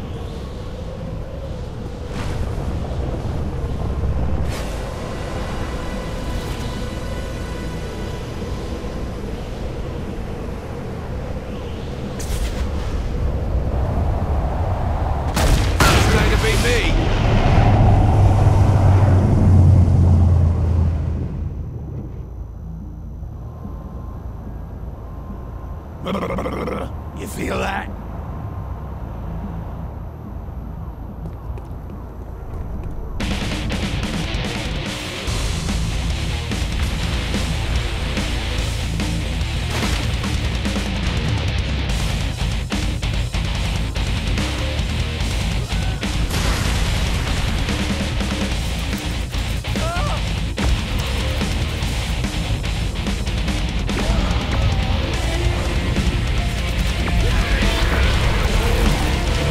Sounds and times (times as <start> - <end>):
Music: 0.0 - 13.9, 29.2 - 59.5
Speech: 15.8 - 17.0, 26.1 - 27.9, 49.8 - 50.2.